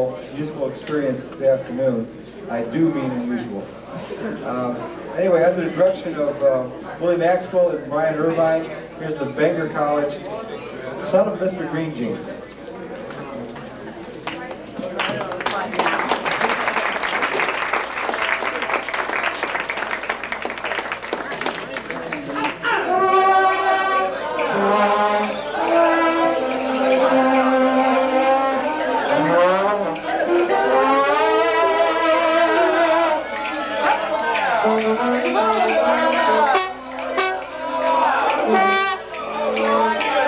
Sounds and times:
Male speech, man speaking: 0:00.0 - 0:03.7, 0:04.4 - 0:12.5.

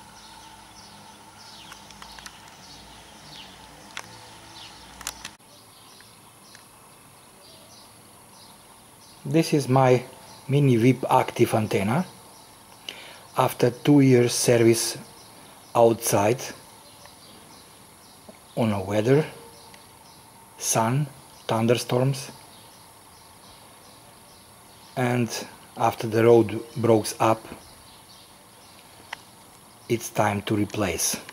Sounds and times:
Speech: 0:09.3 - 0:12.1, 0:13.4 - 0:15.1, 0:15.8 - 0:16.6, 0:18.6 - 0:19.4, 0:20.6 - 0:22.4, 0:25.0 - 0:27.6, 0:29.9 - 0:31.3.

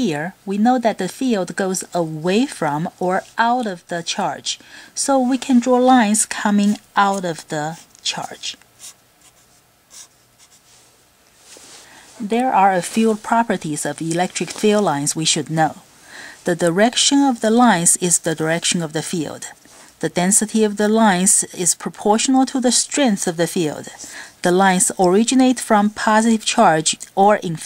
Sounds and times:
Speech: 0:00.0 - 0:08.6, 0:12.2 - 0:27.6.

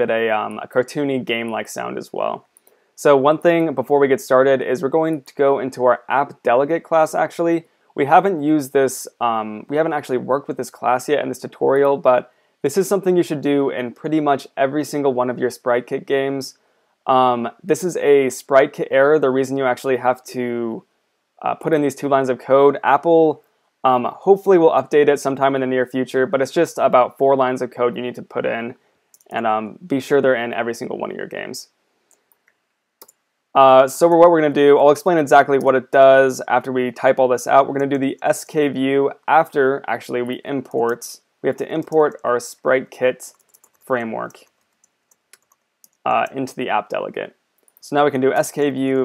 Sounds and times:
Speech: 0:00.0 - 0:20.8, 0:21.4 - 0:31.7, 0:33.6 - 0:44.5, 0:46.0 - 0:49.0.

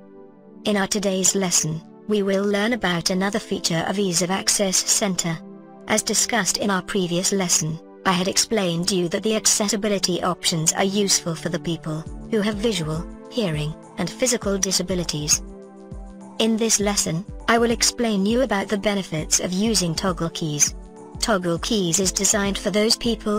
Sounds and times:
Music: 0:00.0 - 0:23.3
Speech: 0:00.7 - 0:15.4, 0:16.4 - 0:23.3.

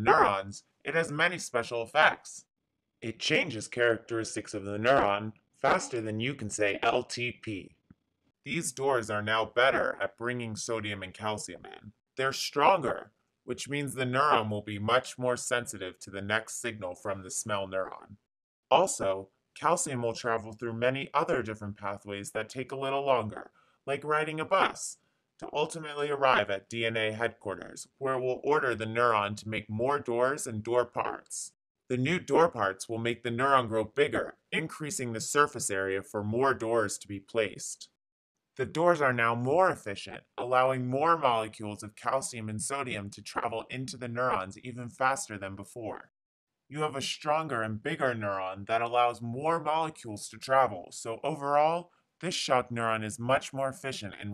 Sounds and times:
Narration, monologue: 0:00.0 - 0:38.0, 0:38.6 - 0:46.1, 0:46.7 - 0:54.3.

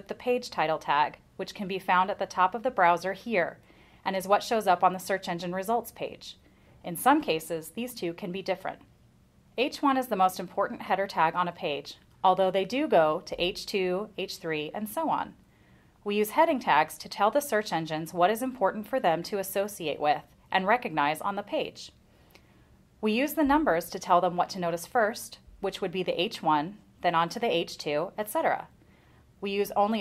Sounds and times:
Speech: 0:00.0 - 0:08.9, 0:09.6 - 0:15.4, 0:16.0 - 0:22.0, 0:23.0 - 0:28.7, 0:29.4 - 0:30.0.

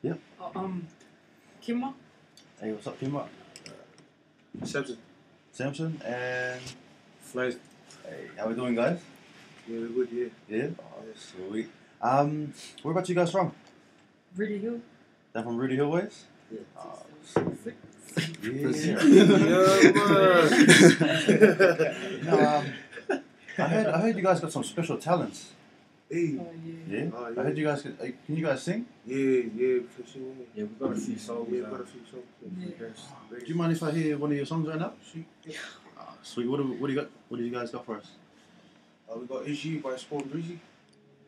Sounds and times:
Speech: 0:00.0 - 0:00.9, 0:02.6 - 0:03.8, 0:04.6 - 0:05.0, 0:05.6 - 0:09.0, 0:09.7 - 0:13.6, 0:15.4 - 0:38.2, 0:39.1 - 0:40.6.

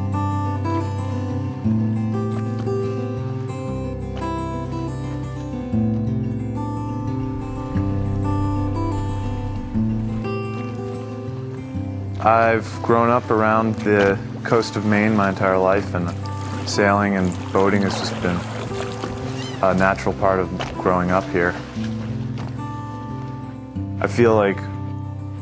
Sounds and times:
Rowboat, canoe, kayak: 0:00.0 - 0:06.3, 0:07.0 - 0:25.4
Music: 0:00.0 - 0:25.4
Speech: 0:12.2 - 0:18.4, 0:19.6 - 0:21.6, 0:24.0 - 0:24.7.

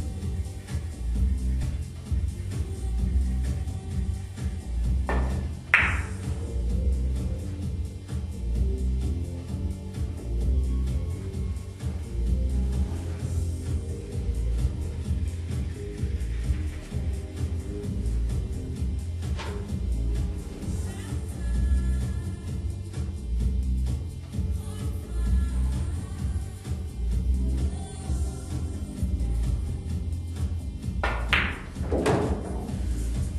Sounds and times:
Music: 0:00.0 - 0:33.3.

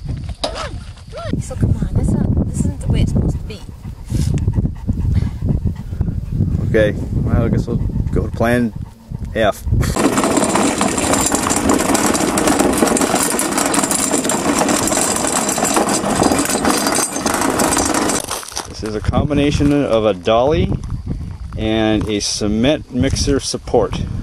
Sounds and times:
Outside, rural or natural: 0:00.0 - 0:24.2
Speech: 0:01.1 - 0:03.7, 0:06.7 - 0:08.7, 0:09.4 - 0:09.6, 0:18.8 - 0:20.8, 0:21.6 - 0:24.1.

